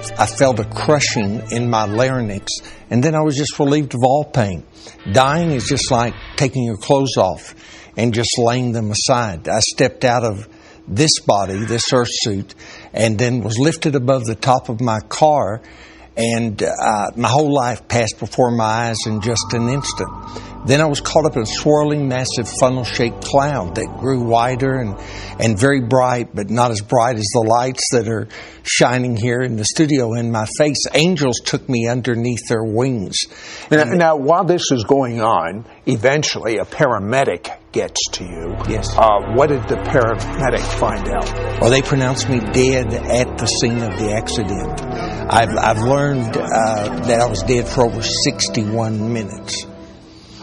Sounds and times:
Speech: 0.2 - 15.6, 16.2 - 49.7.

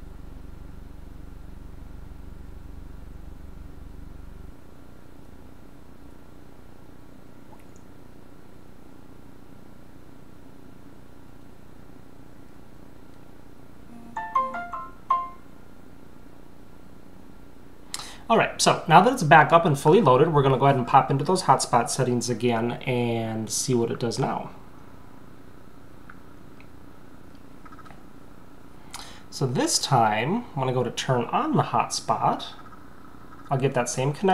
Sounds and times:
Inside, small room: 0.0 - 34.3.

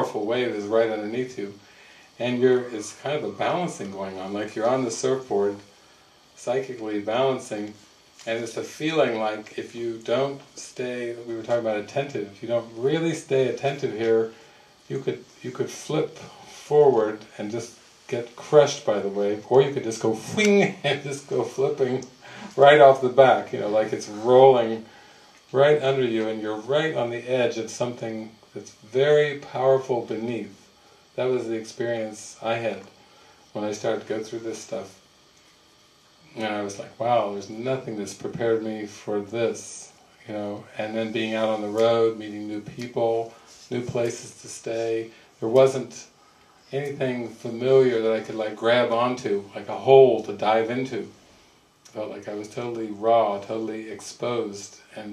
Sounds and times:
Speech: 0.0 - 5.7, 6.4 - 24.9, 25.5 - 33.0, 33.6 - 35.0, 36.3 - 51.2, 51.9 - 55.1.

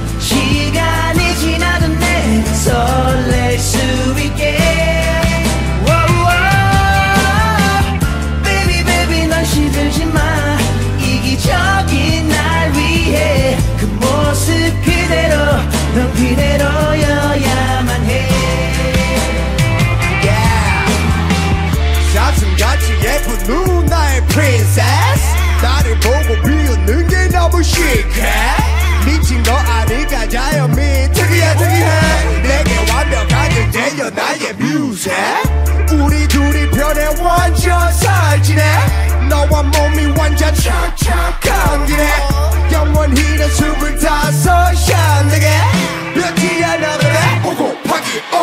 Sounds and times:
Reggae: 0.0 - 48.4
Singing: 0.0 - 48.4.

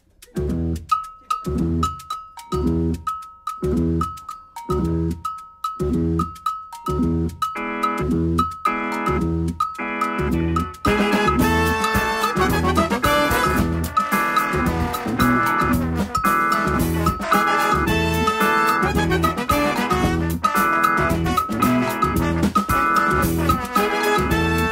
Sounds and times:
Afrobeat: 0.0 - 24.7
Musical instrument: 0.0 - 24.7.

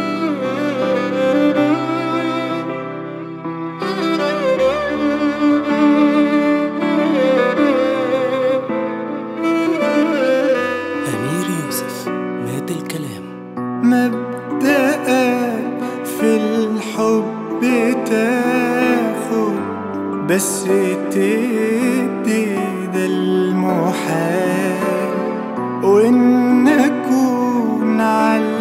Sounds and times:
Music: 0.0 - 28.6.

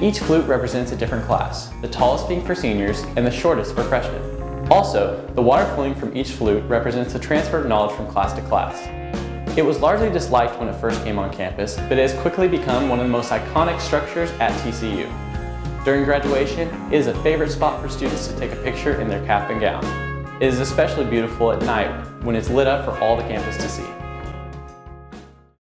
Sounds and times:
Speech: 0.0 - 8.9, 9.6 - 15.1, 15.8 - 24.0
Music: 0.0 - 25.6.

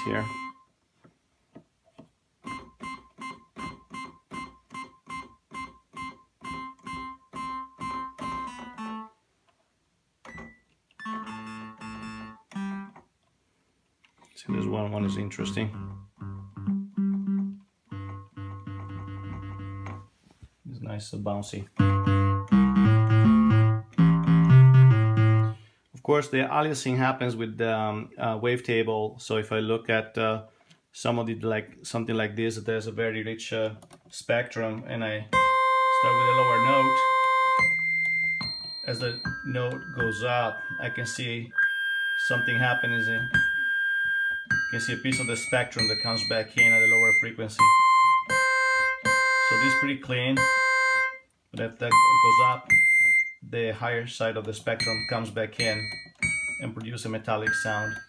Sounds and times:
Speech: 0.0 - 0.4, 14.4 - 15.8, 20.6 - 21.8, 26.0 - 35.4, 36.0 - 37.1, 38.9 - 41.6, 42.2 - 43.4, 44.7 - 47.7, 49.5 - 50.5, 51.6 - 52.7, 53.4 - 55.8, 56.6 - 58.0
Inside, small room: 0.0 - 58.0
Synthesizer: 35.4 - 49.8.

